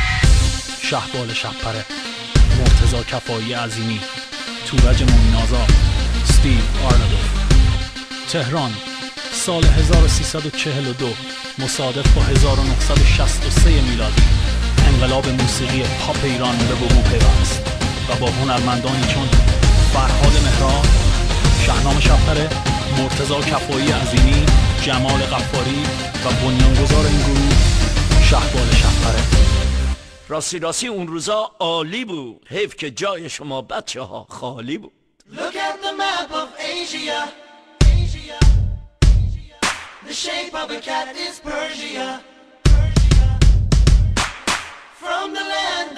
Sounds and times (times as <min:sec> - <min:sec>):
Music: 0:00.0 - 0:31.1, 0:35.4 - 0:45.9
Speech: 0:00.8 - 0:07.4, 0:08.3 - 0:29.3, 0:30.3 - 0:35.5.